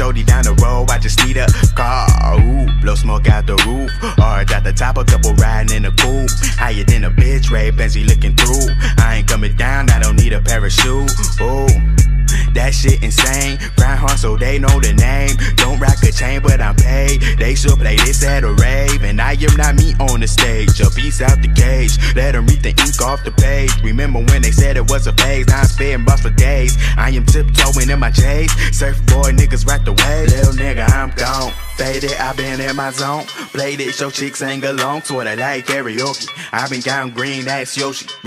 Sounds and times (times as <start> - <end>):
Background music: 0.0 - 38.2
Pop music: 0.0 - 38.2
Rhythm and blues: 0.0 - 38.2.